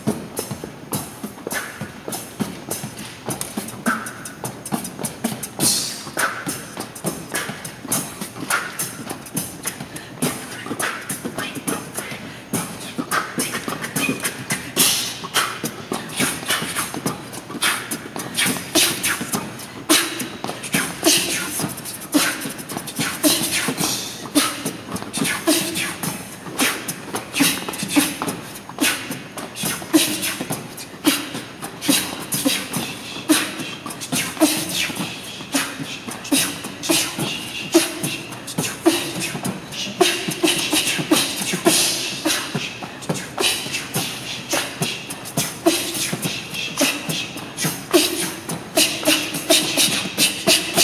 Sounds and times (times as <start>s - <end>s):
Percussion: 0.0s - 50.8s.